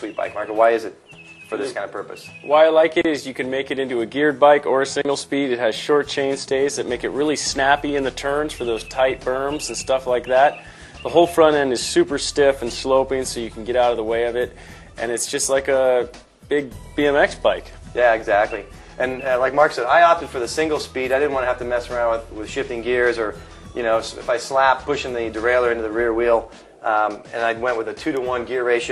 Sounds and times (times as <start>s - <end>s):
Music: 0.0s - 28.9s
Speech: 0.0s - 28.9s.